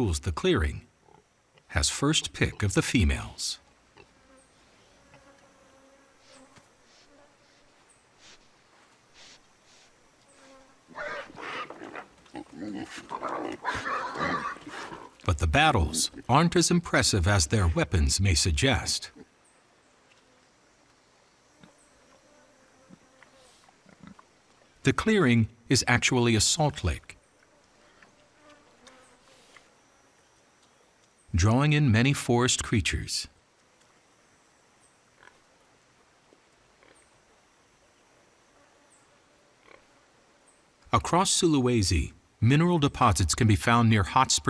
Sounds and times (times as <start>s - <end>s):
Pig: 10.9s - 15.3s, 22.9s - 24.3s, 35.2s - 35.5s, 36.8s - 37.1s, 39.6s - 39.9s.